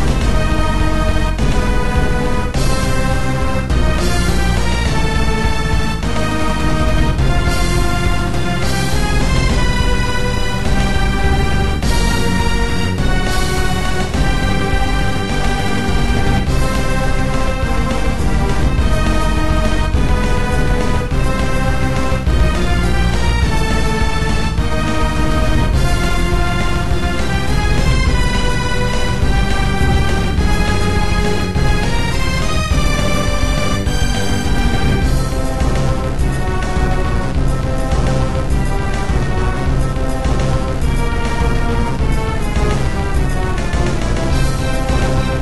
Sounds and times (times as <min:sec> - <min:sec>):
Theme music: 0:00.0 - 0:45.4.